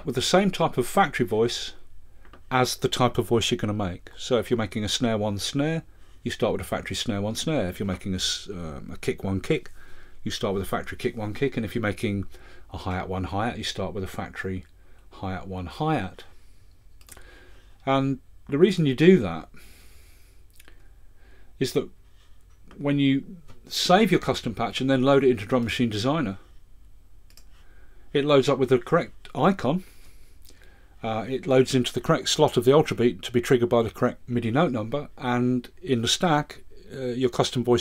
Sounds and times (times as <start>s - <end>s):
Speech: 0.0s - 1.9s, 2.5s - 16.4s, 17.8s - 19.5s, 21.6s - 22.0s, 22.7s - 26.4s, 28.2s - 29.9s, 31.0s - 37.8s.